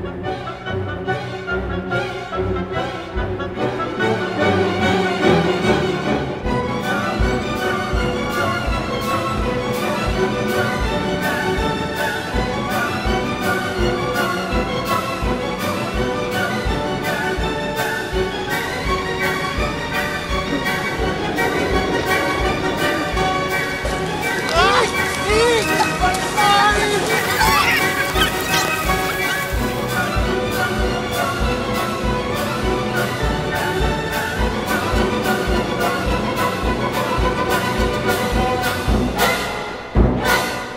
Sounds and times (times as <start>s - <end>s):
Music: 0.0s - 40.7s
Speech: 24.4s - 29.3s.